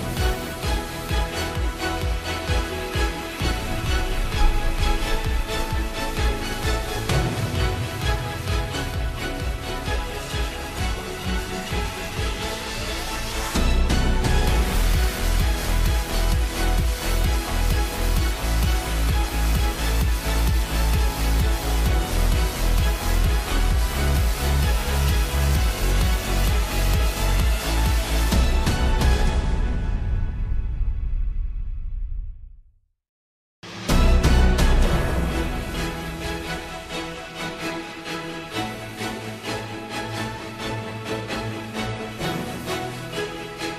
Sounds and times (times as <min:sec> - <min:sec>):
Theme music: 0:00.0 - 0:31.9, 0:33.6 - 0:43.7.